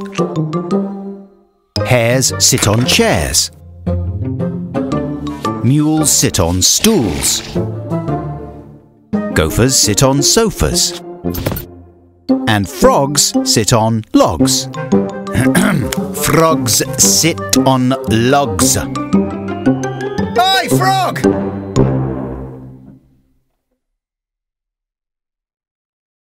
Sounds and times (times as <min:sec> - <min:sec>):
Music: 0:00.0 - 0:23.7
Speech: 0:01.8 - 0:03.6, 0:05.6 - 0:07.6, 0:09.4 - 0:11.0, 0:12.5 - 0:14.7, 0:15.4 - 0:19.0, 0:20.4 - 0:21.3.